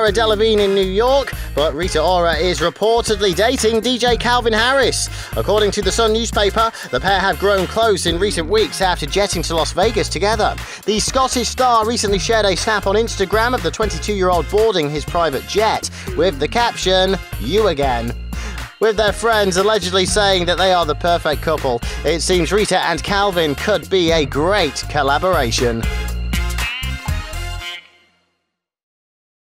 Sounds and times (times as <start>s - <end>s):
Speech: 0.0s - 18.1s, 18.8s - 25.8s
Music: 0.0s - 28.8s.